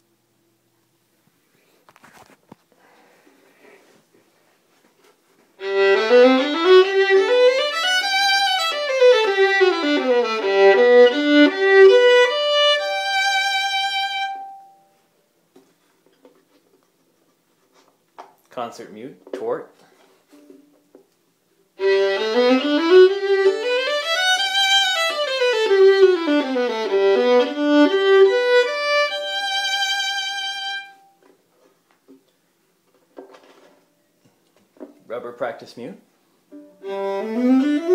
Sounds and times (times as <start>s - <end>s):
Violin, fiddle: 5.6s - 14.7s, 21.8s - 31.2s, 36.6s - 37.9s.